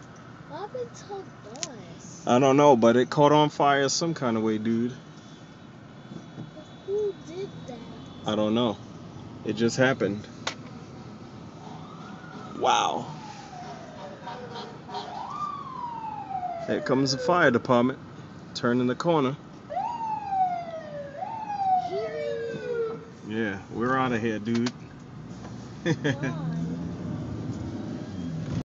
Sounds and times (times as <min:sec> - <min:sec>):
Vehicle: 0:00.0 - 0:28.6.